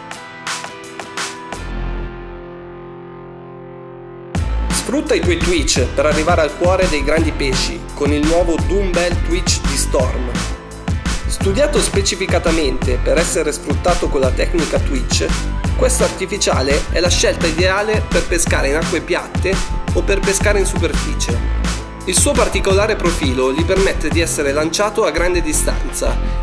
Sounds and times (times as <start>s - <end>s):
Music: 0.0s - 26.4s
Speech: 4.7s - 10.5s, 11.3s - 21.4s, 22.1s - 26.2s.